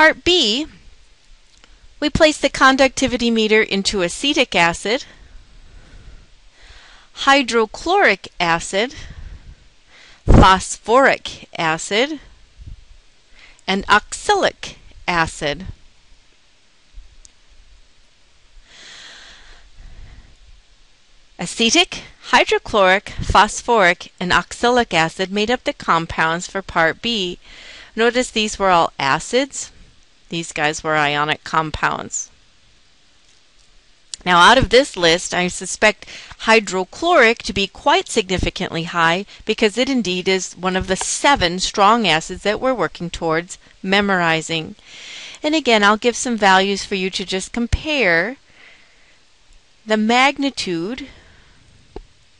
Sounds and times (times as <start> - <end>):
Speech: 0.0 - 0.8, 2.0 - 5.1, 7.2 - 9.1, 10.3 - 12.3, 13.7 - 15.8, 21.4 - 27.4, 28.0 - 29.7, 30.3 - 32.3, 34.2 - 44.8, 45.4 - 48.4, 49.9 - 51.1.